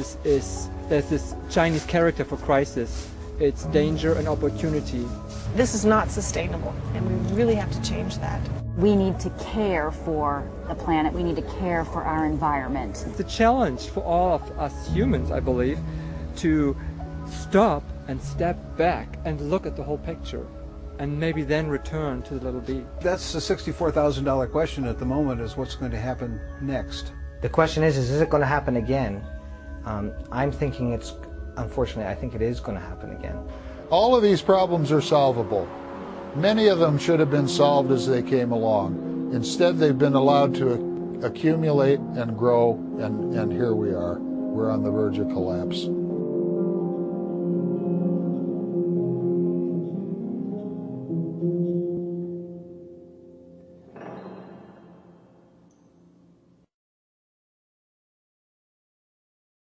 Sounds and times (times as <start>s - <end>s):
Speech: 0.0s - 15.8s, 21.0s - 29.2s, 29.9s - 35.6s, 36.4s - 45.9s
Music: 0.0s - 56.7s.